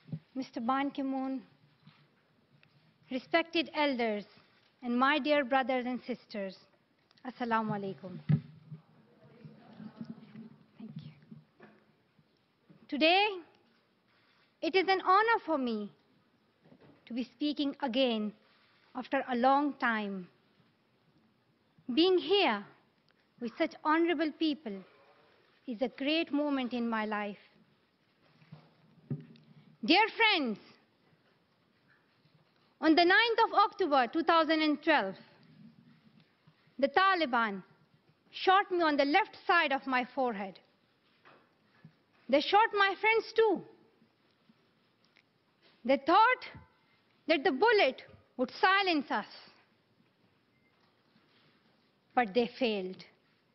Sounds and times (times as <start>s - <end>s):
Narration, monologue: 0.0s - 53.5s
Female speech, woman speaking: 0.4s - 1.5s, 3.1s - 8.2s, 12.9s - 13.5s, 14.6s - 16.0s, 17.1s - 18.4s, 19.0s - 20.4s, 21.9s - 22.8s, 23.4s - 24.8s, 25.7s - 27.5s, 29.8s - 30.8s, 32.8s - 35.3s, 36.8s - 37.7s, 38.4s - 40.7s, 42.3s - 43.8s, 45.9s - 46.6s, 47.3s - 49.5s, 52.2s - 53.1s.